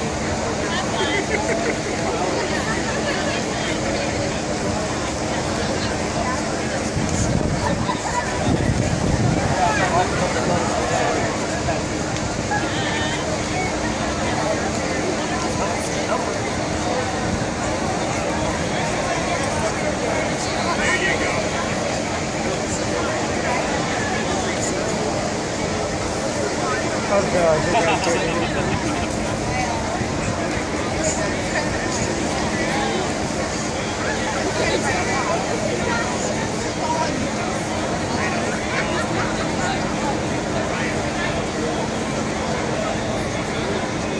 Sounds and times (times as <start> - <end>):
Speech: 0.0 - 44.2.